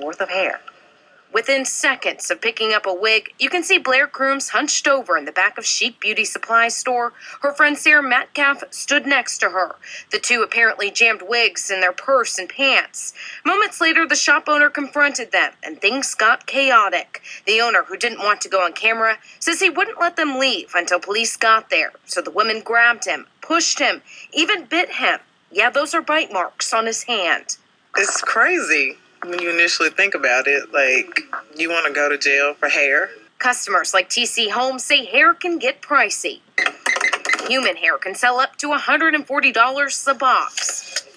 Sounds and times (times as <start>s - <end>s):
Speech: 1.4s - 36.4s, 37.4s - 41.1s.